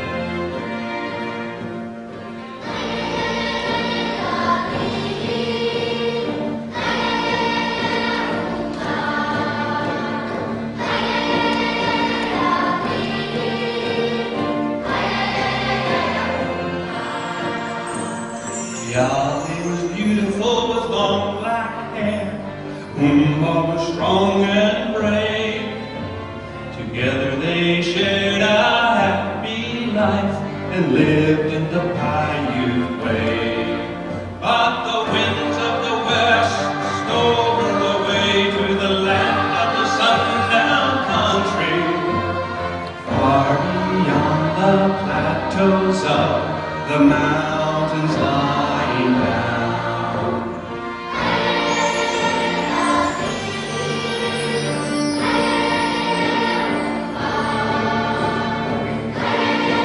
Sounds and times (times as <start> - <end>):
Orchestra: 0.0 - 59.8
Choir: 2.4 - 26.0, 26.6 - 59.8.